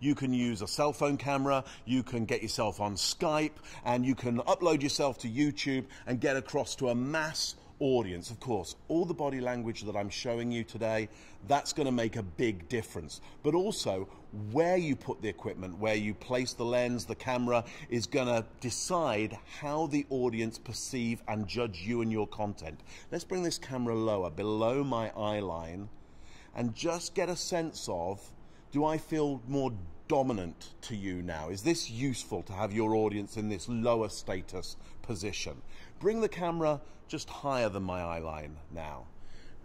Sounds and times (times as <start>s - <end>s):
Speech: 0.0s - 25.9s, 26.6s - 39.1s.